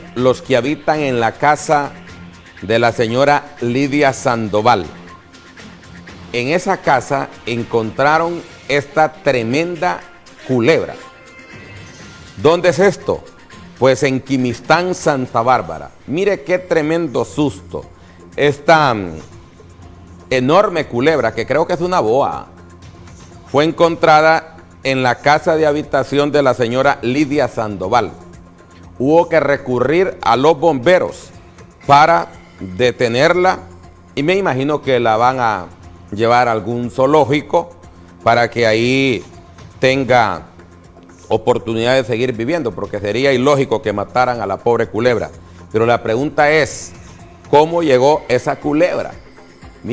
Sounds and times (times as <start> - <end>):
Music: 0.0 - 49.9
Speech: 0.2 - 1.9, 2.6 - 5.0, 6.4 - 11.0, 12.4 - 17.8, 20.3 - 22.5, 23.5 - 28.2, 29.0 - 31.3, 31.9 - 33.6, 34.2 - 37.7, 38.3 - 39.2, 39.8 - 40.5, 41.3 - 46.9, 47.5 - 49.2.